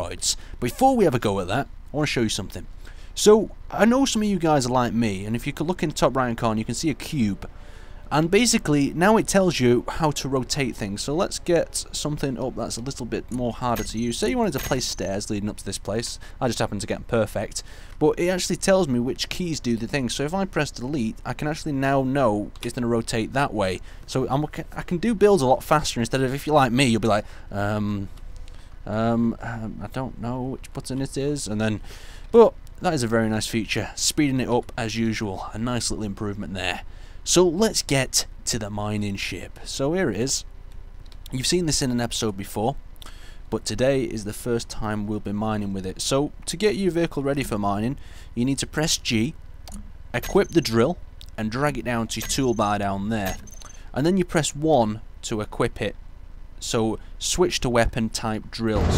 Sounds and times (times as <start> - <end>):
Speech: 0.0 - 7.5, 8.1 - 28.1, 28.9 - 40.5, 41.3 - 42.8, 43.5 - 49.4, 50.2 - 56.0, 56.6 - 58.9.